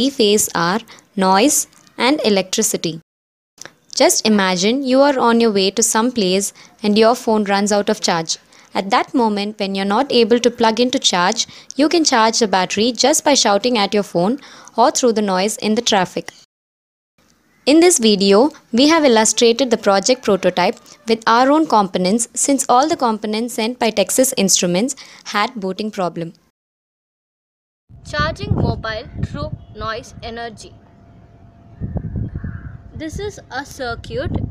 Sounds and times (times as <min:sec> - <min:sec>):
Speech: 0:04.0 - 0:16.3, 0:17.7 - 0:26.4, 0:28.1 - 0:30.8, 0:33.0 - 0:34.4.